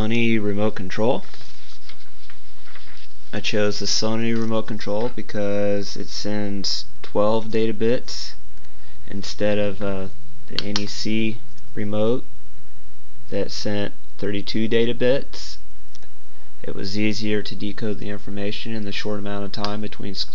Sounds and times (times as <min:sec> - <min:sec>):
Speech: 0:00.0 - 0:01.3, 0:03.3 - 0:08.4, 0:09.1 - 0:12.3, 0:13.3 - 0:15.6, 0:16.6 - 0:20.3.